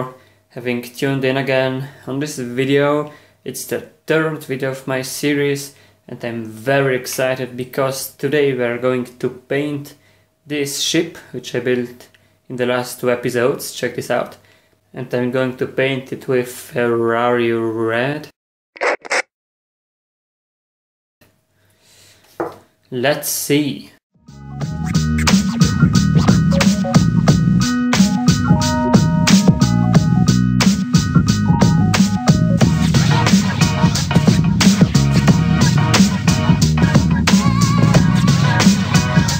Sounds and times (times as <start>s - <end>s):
Speech: 0.0s - 18.4s, 22.9s - 24.0s.